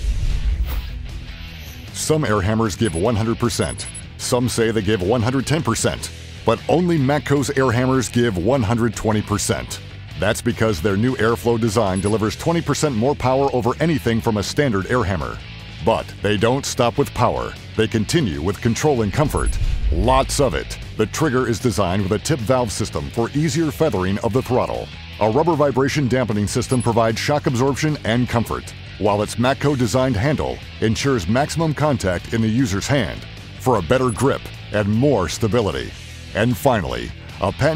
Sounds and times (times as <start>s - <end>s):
Music: 0.0s - 37.7s
Speech: 2.0s - 37.7s.